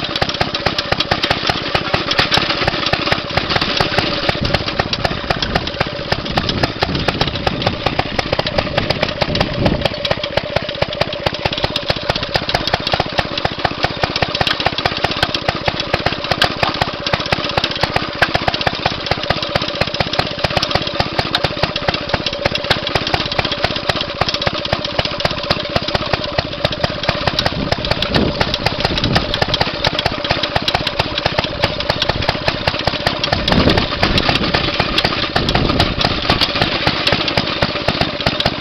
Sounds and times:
Engine: 0.0s - 38.6s
Outside, rural or natural: 0.0s - 38.6s.

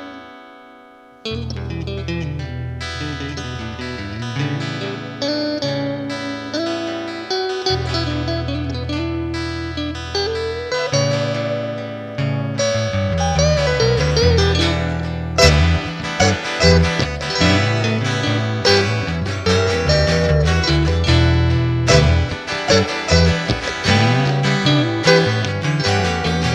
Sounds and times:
Guitar: 0.0s - 26.5s.

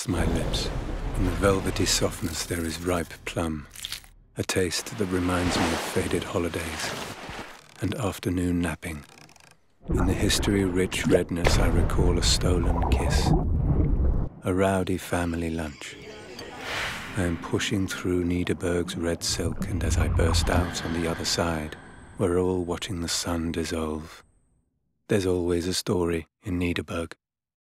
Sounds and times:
Speech: 0.0s - 3.7s, 4.4s - 7.0s, 7.8s - 9.0s, 9.9s - 13.4s, 14.4s - 24.2s, 25.1s - 27.2s.

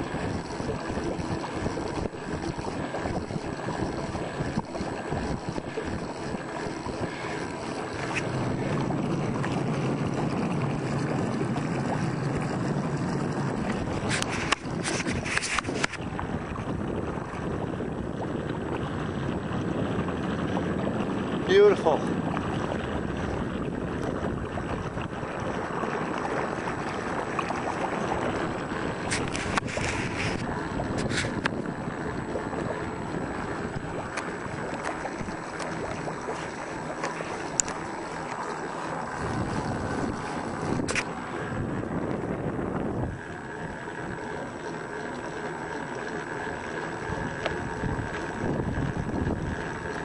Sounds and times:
Wind noise (microphone): 0.0s - 36.1s, 39.1s - 44.1s, 47.0s - 50.0s
Boat, Water vehicle: 0.0s - 50.0s.

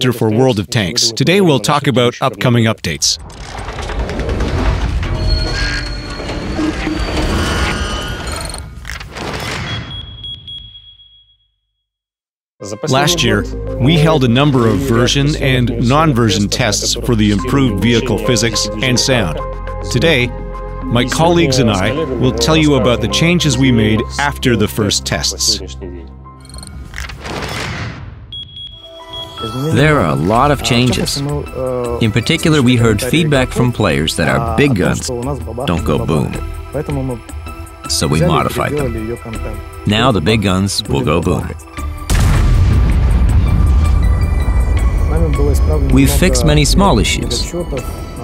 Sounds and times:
Speech: 0.0s - 3.2s, 12.6s - 26.1s, 29.4s - 37.2s, 37.9s - 41.6s, 45.1s - 47.9s
Music: 12.6s - 27.4s, 28.8s - 48.2s.

